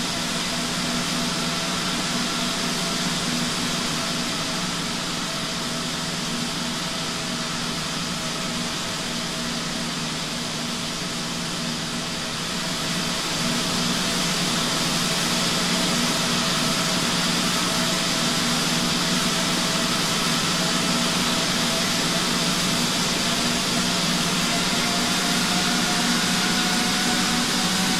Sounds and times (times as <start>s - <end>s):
Fixed-wing aircraft, airplane: 0.0s - 27.9s.